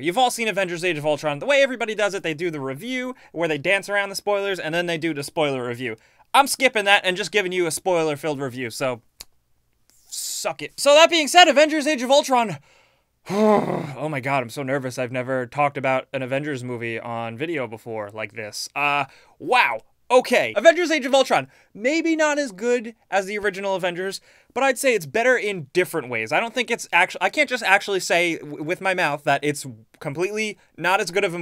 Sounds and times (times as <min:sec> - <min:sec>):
Speech: 0:00.0 - 0:09.0, 0:10.1 - 0:12.6, 0:13.8 - 0:31.4
Inside, small room: 0:00.0 - 0:31.4.